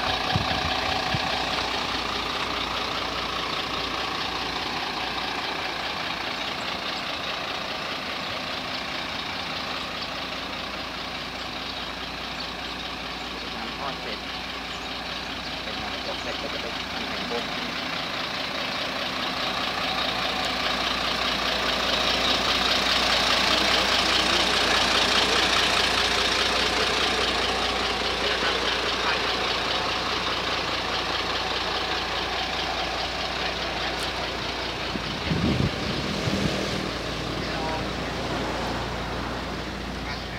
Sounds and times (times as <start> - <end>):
Speech: 13.4 - 14.3, 15.7 - 17.6, 28.2 - 29.5, 37.4 - 38.3, 40.0 - 40.3.